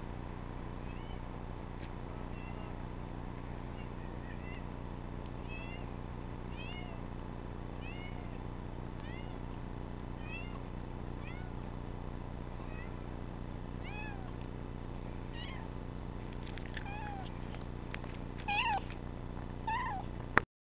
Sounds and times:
Meow: 0.8 - 1.3, 2.3 - 2.8, 3.8 - 4.7, 5.4 - 5.9, 6.5 - 7.0, 7.8 - 8.4, 9.0 - 9.5, 10.2 - 10.6, 11.2 - 11.6, 12.6 - 13.0, 13.8 - 14.4, 15.3 - 15.7, 16.8 - 17.3, 18.5 - 18.9, 19.7 - 20.1.

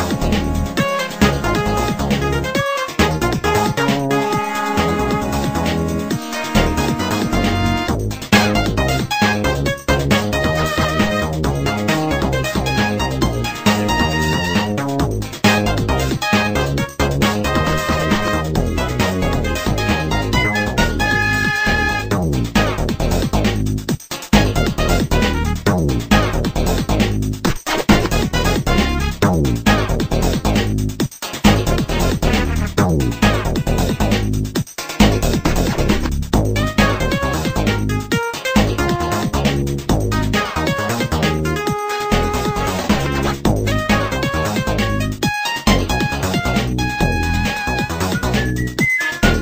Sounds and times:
Music: 0.0 - 49.4.

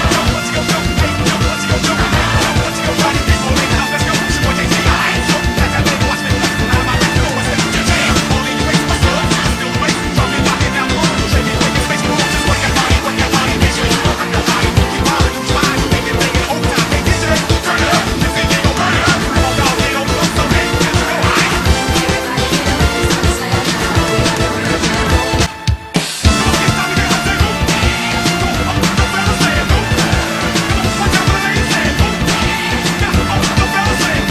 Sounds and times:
Music: 0.0 - 34.3.

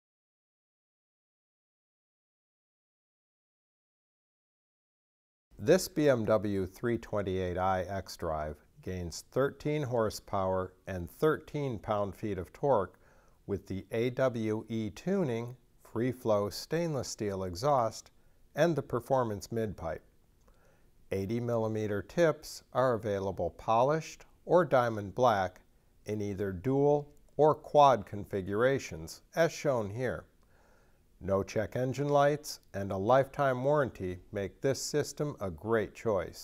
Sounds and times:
Speech: 5.6 - 20.1, 21.1 - 30.3, 31.2 - 36.4.

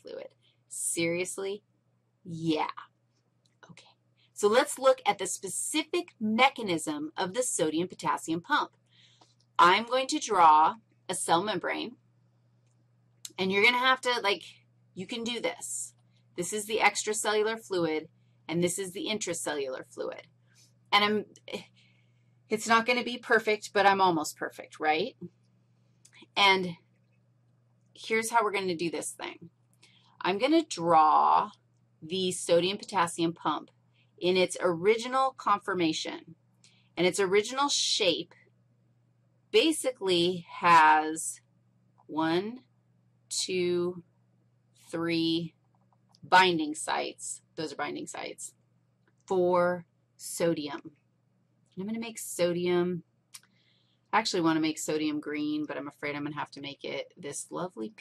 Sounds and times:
Speech: 0.0 - 1.6, 2.3 - 2.9, 4.4 - 8.7, 9.6 - 12.0, 13.3 - 20.2, 21.0 - 21.7, 22.5 - 25.3, 26.2 - 26.8, 28.0 - 29.5, 30.2 - 36.3, 37.0 - 38.3, 39.6 - 41.4, 42.1 - 42.6, 43.3 - 44.0, 44.9 - 45.5, 46.3 - 48.5, 49.3 - 50.9, 51.8 - 53.0, 54.2 - 58.0.

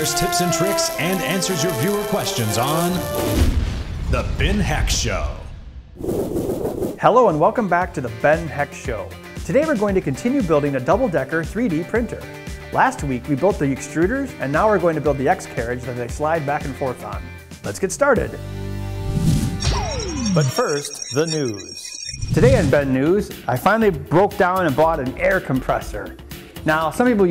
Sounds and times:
Speech: 0.0 - 3.0, 4.1 - 5.5, 7.0 - 18.4, 20.5 - 21.7, 22.4 - 27.3
Music: 0.0 - 3.7, 7.0 - 21.6, 22.3 - 27.3.

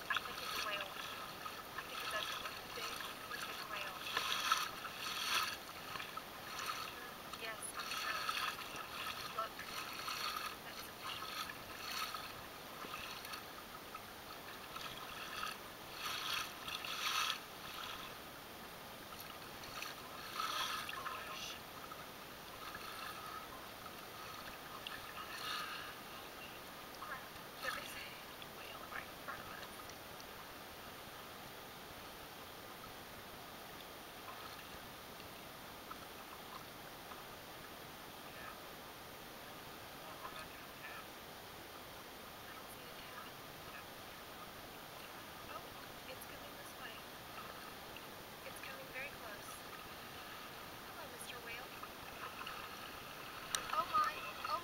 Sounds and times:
Rowboat, canoe, kayak: 0.0 - 54.6.

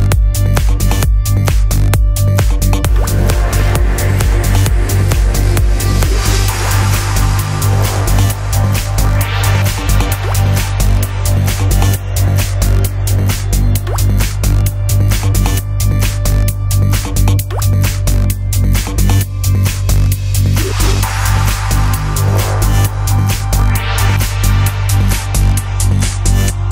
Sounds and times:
Music: 0.0 - 26.7.

